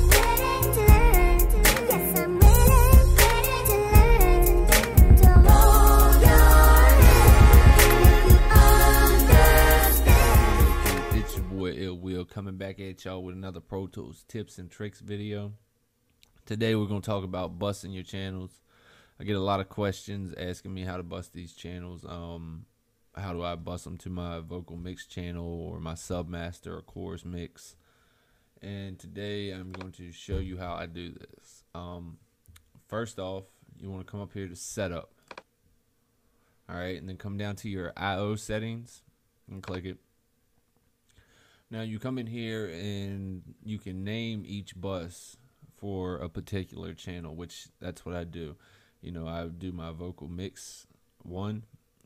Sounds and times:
Speech: 11.4s - 15.6s, 16.5s - 18.6s, 19.2s - 27.8s, 28.6s - 32.2s, 32.9s - 35.1s, 36.7s - 40.0s, 41.7s - 51.8s.

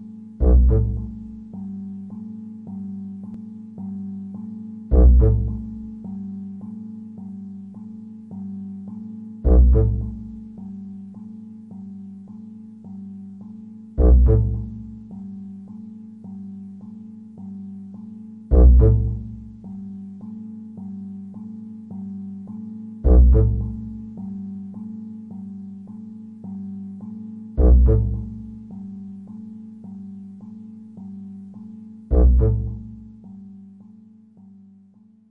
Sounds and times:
Music: 0.0s - 35.3s.

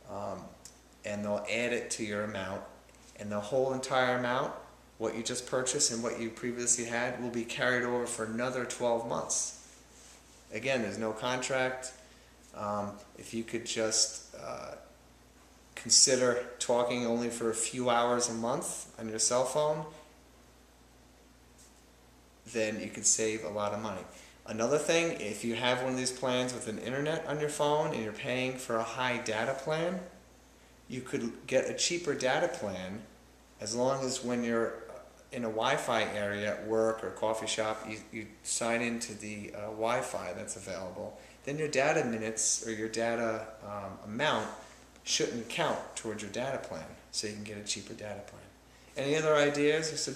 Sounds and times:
Speech: 0.0s - 9.6s, 10.5s - 15.0s, 15.8s - 20.0s, 22.5s - 30.2s, 30.9s - 50.1s
Inside, small room: 0.0s - 50.1s.

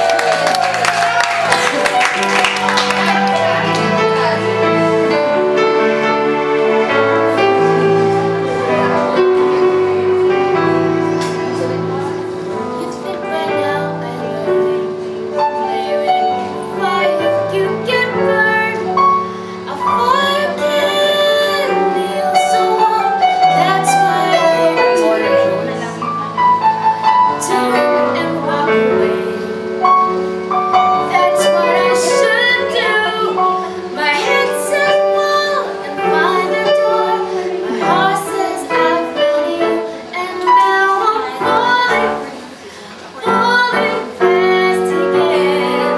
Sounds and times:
Music: 0.0s - 45.9s
Female singing: 12.8s - 26.1s, 27.3s - 29.8s, 30.8s - 45.9s.

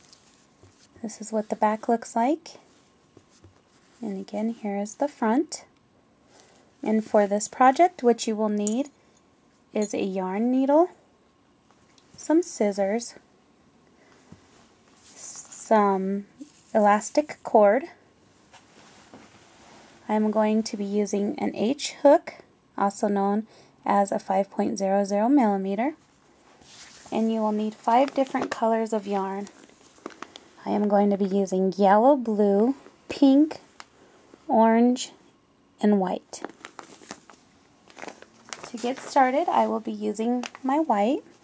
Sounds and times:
Speech: 1.0s - 2.6s, 4.0s - 5.7s, 6.8s - 8.9s, 9.8s - 11.0s, 12.2s - 13.2s, 15.2s - 18.0s, 20.1s - 26.0s, 27.1s - 29.5s, 30.6s - 33.7s, 34.5s - 35.2s, 35.8s - 36.5s, 38.7s - 41.3s.

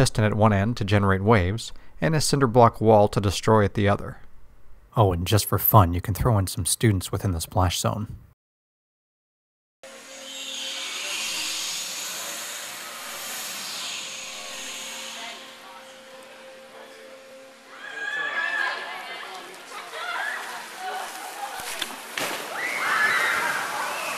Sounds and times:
Speech: 0.0s - 4.2s, 5.0s - 8.2s.

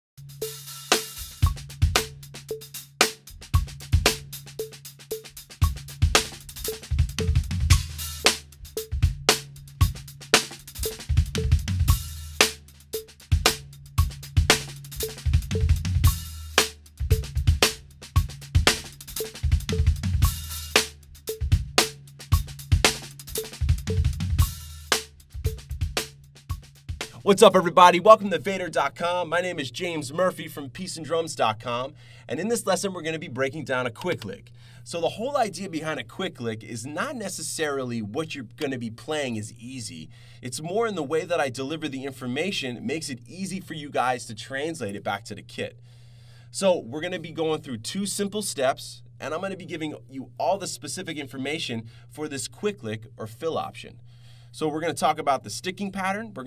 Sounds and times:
Music: 0.2s - 43.7s
Speech: 27.2s - 45.8s, 46.5s - 54.0s, 54.6s - 56.4s.

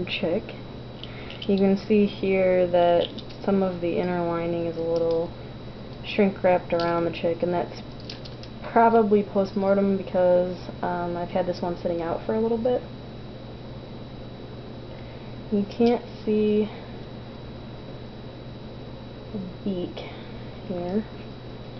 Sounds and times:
Speech: 0.0s - 0.6s, 1.5s - 5.3s, 6.1s - 7.8s, 8.6s - 12.9s, 15.5s - 16.8s, 19.4s - 21.1s.

